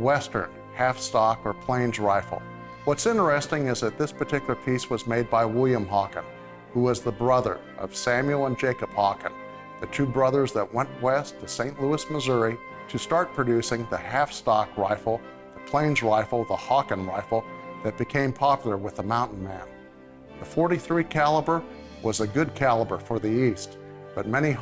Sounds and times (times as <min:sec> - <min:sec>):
Speech: 0:00.0 - 0:19.7, 0:20.4 - 0:24.6
Music: 0:00.0 - 0:24.6.